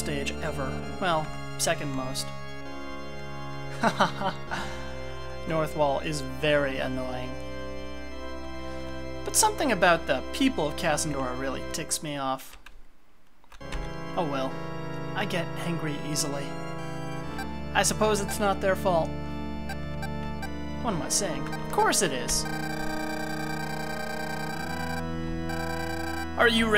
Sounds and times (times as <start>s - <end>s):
Speech: 0.0s - 2.3s, 5.5s - 7.4s, 9.3s - 12.6s, 14.2s - 14.6s, 15.2s - 16.5s, 17.8s - 19.1s, 20.8s - 22.5s, 26.4s - 26.7s
Music: 0.0s - 12.3s, 13.6s - 26.7s.